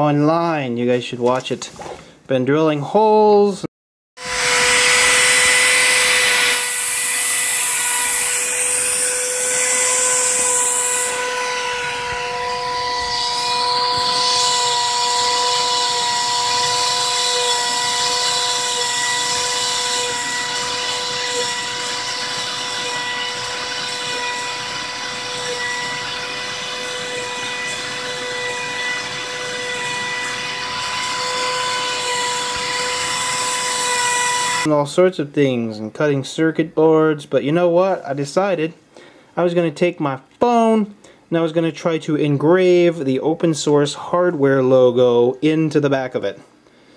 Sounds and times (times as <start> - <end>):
Speech: 0.0 - 3.7, 34.7 - 38.8, 39.4 - 46.5.